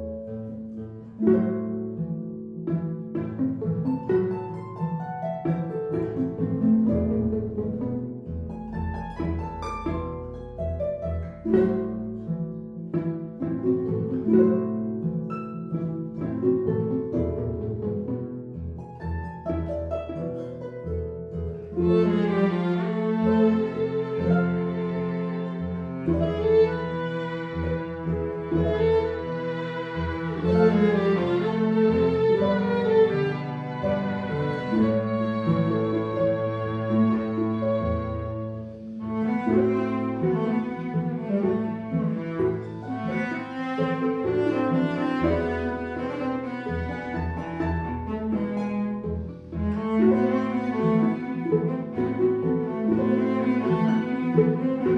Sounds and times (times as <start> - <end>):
Bowed string instrument: 0.0 - 54.9.